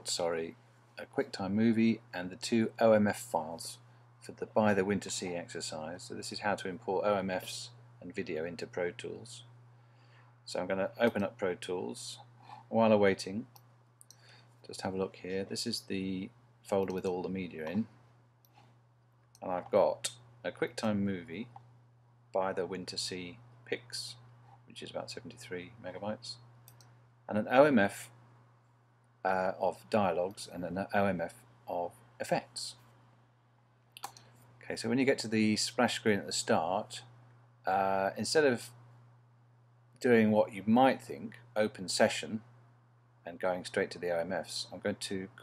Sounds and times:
Speech: 0:00.0 - 0:09.5, 0:10.5 - 0:13.5, 0:14.6 - 0:18.0, 0:19.4 - 0:21.6, 0:22.4 - 0:26.5, 0:27.3 - 0:28.2, 0:29.3 - 0:32.8, 0:34.6 - 0:38.8, 0:40.0 - 0:42.5, 0:43.3 - 0:45.4.

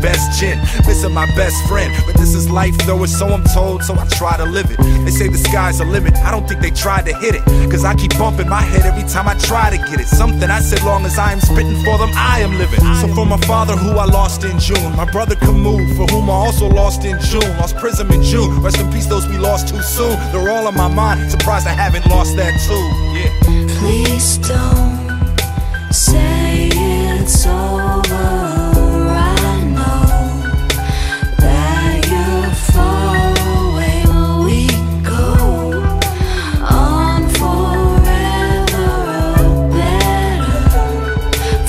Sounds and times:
Rapping: 0:00.0 - 0:25.2, 0:25.9 - 0:41.6.

